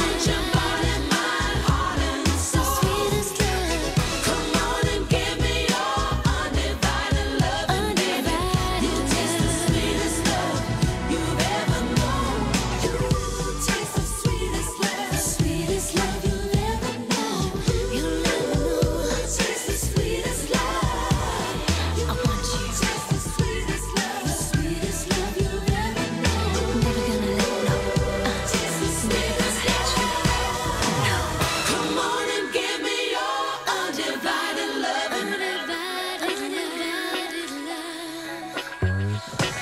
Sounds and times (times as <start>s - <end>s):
Music: 0.0s - 39.6s.